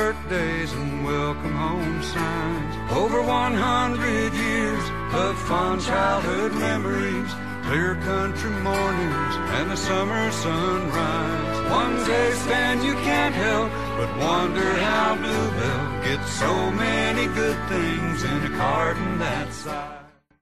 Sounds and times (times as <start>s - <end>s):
Music: 0.0s - 20.4s.